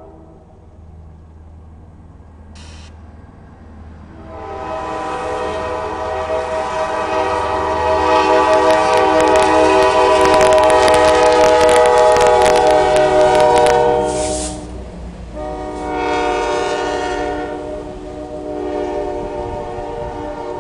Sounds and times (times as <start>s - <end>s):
Train horn: 0.0s - 0.5s, 4.1s - 14.6s, 15.3s - 20.6s
Outside, urban or manmade: 0.0s - 20.6s
Train whistle: 4.1s - 14.7s, 15.4s - 20.6s.